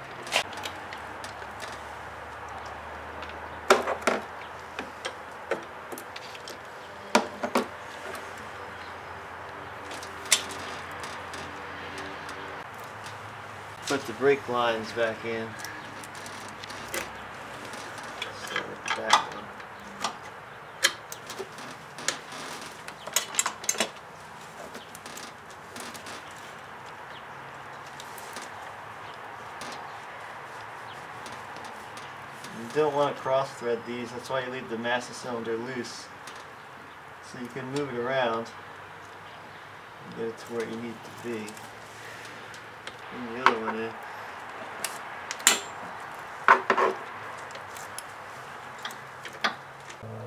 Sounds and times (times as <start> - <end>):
Outside, urban or manmade: 0.0 - 50.2
Speech: 13.9 - 15.6, 18.3 - 19.5, 32.5 - 36.1, 37.3 - 38.6, 40.1 - 41.6, 43.1 - 44.0.